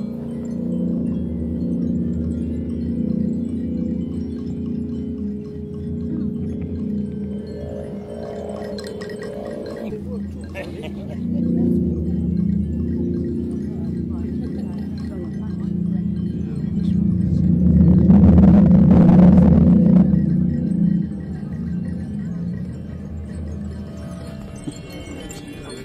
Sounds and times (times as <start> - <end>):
Musical instrument: 0.0 - 25.8
Wind: 0.0 - 25.8
Speech: 9.8 - 17.6, 24.9 - 25.8.